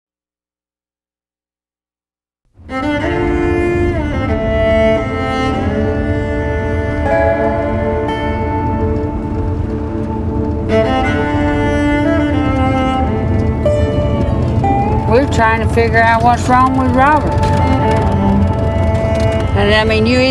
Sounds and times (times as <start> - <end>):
Bowed string instrument: 2.6 - 20.3.